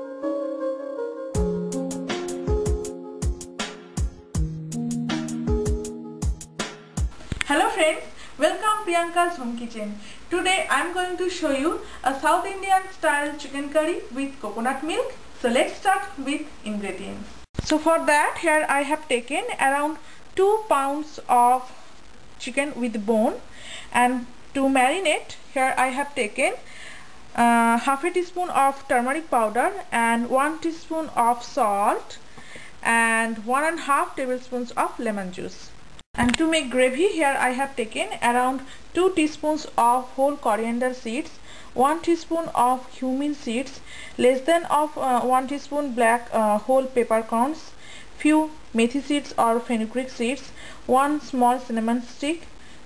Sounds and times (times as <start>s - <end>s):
Speech: 7.4s - 21.8s, 22.4s - 23.4s, 24.0s - 26.6s, 27.4s - 32.2s, 32.8s - 52.5s.